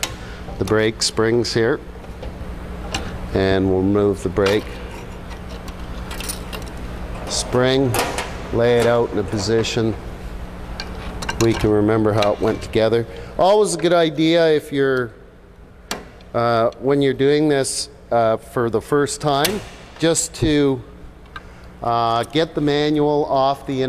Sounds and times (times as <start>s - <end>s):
Speech: 0.6s - 1.8s, 3.3s - 4.7s, 7.3s - 10.0s, 11.4s - 15.2s, 16.4s - 20.8s, 21.8s - 23.8s.